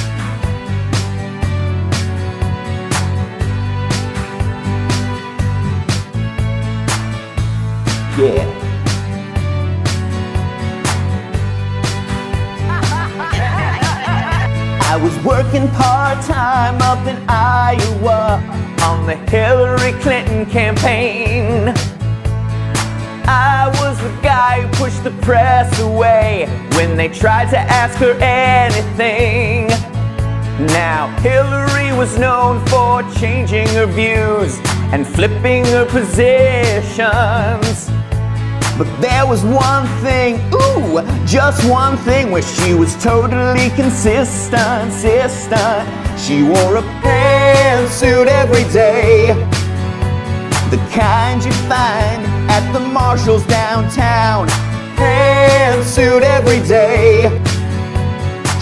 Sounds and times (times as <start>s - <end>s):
Music: 0.0s - 58.6s.